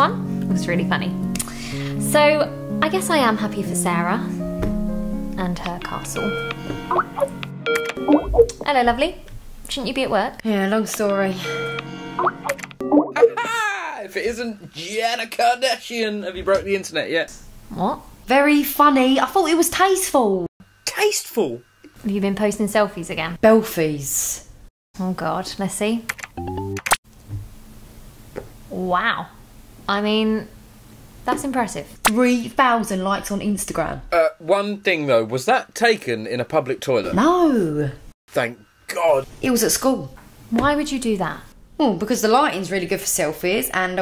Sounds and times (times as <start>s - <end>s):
Speech: 25.0s - 26.1s.